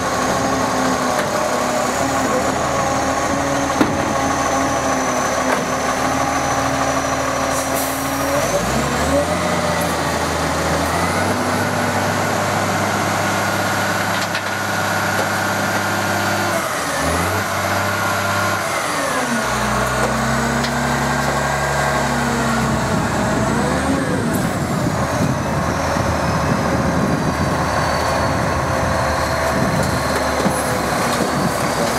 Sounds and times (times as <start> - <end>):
Truck: 0.0 - 31.9.